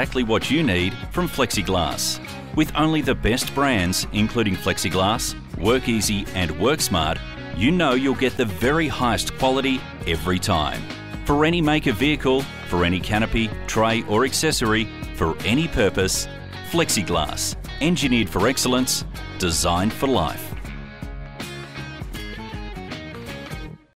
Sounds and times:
Speech: 0.0s - 20.6s
Music: 0.0s - 23.9s.

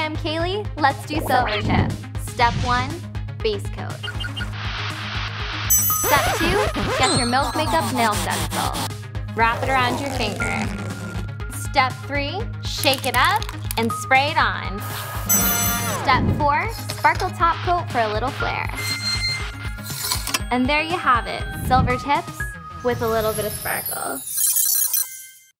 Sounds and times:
Speech: 0.0s - 4.0s, 6.1s - 10.6s, 11.6s - 14.8s, 16.0s - 18.8s, 20.5s - 24.2s
Music: 0.0s - 24.4s.

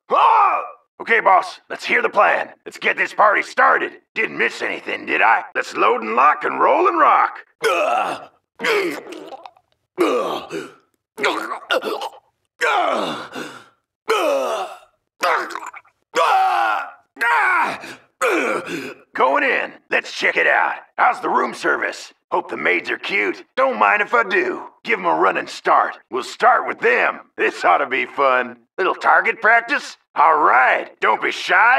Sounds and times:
Speech: 0.1s - 9.1s, 11.2s - 11.6s, 16.2s - 31.7s
Groan: 7.6s - 19.0s.

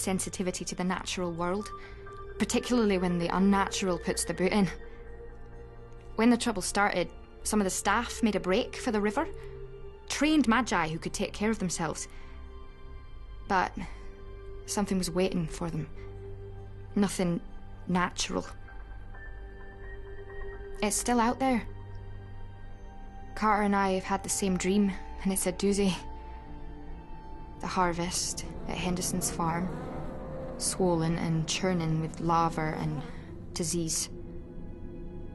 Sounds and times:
Speech: 0.0s - 1.8s, 2.4s - 4.8s, 6.2s - 9.3s, 10.1s - 12.1s, 13.5s - 14.0s, 14.7s - 15.9s, 17.0s - 18.6s, 20.8s - 21.7s, 23.4s - 26.1s, 27.6s - 29.7s, 30.6s - 34.1s
Music: 0.0s - 35.3s.

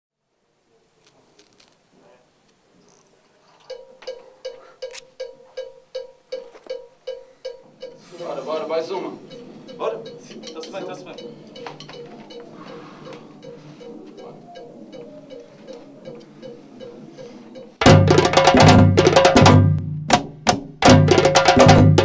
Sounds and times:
Speech: 8.1s - 9.2s, 9.8s - 11.3s.

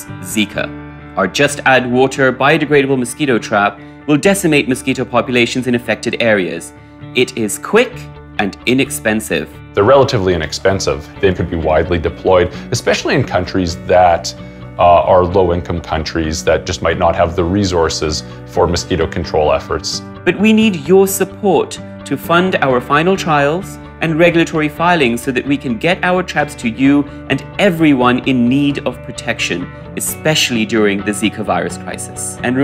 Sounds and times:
Music: 0.0s - 32.6s
Speech: 0.0s - 32.6s.

